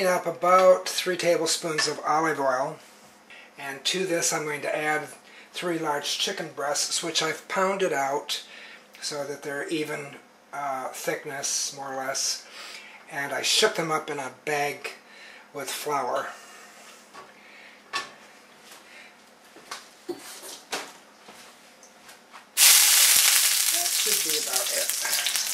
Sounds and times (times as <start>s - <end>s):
Speech: 0.0s - 2.8s, 3.6s - 12.5s, 13.1s - 16.4s, 23.7s - 25.4s.